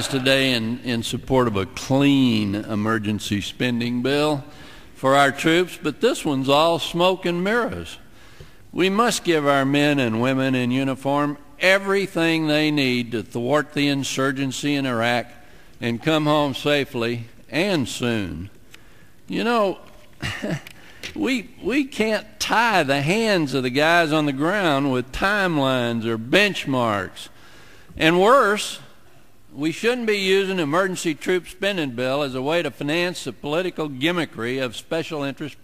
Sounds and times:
Male speech, man speaking: 0.0s - 8.0s, 8.8s - 18.5s, 19.3s - 19.8s, 21.2s - 27.3s, 28.0s - 28.9s, 29.6s - 35.6s
Narration, monologue: 0.0s - 35.6s.

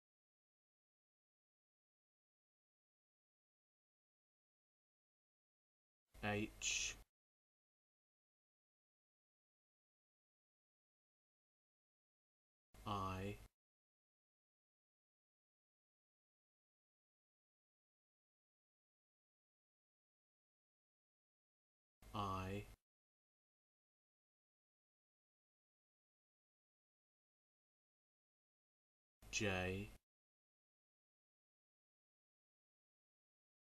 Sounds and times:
Speech: 6.2s - 7.1s, 12.9s - 13.5s, 22.2s - 22.8s, 29.4s - 30.0s.

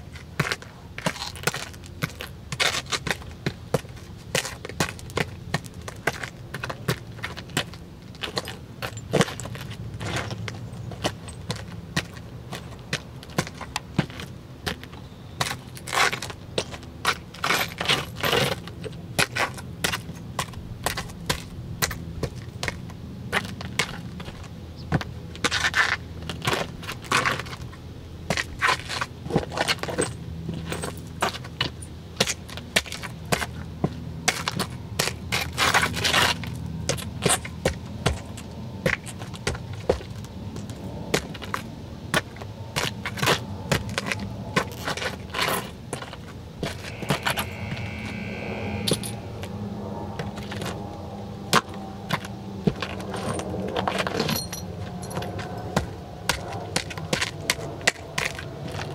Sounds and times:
Outside, urban or manmade: 0.0s - 58.9s.

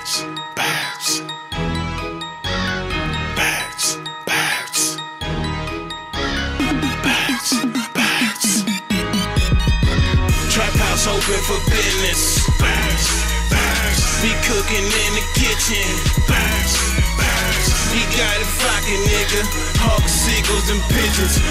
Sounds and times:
Exciting music: 1.0s - 21.5s.

